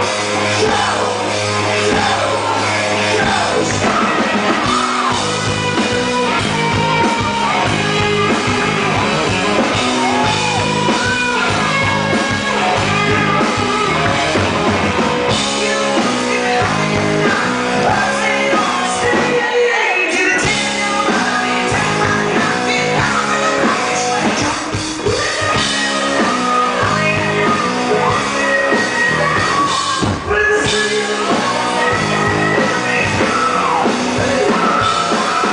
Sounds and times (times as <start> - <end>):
Music: 0.0 - 35.5.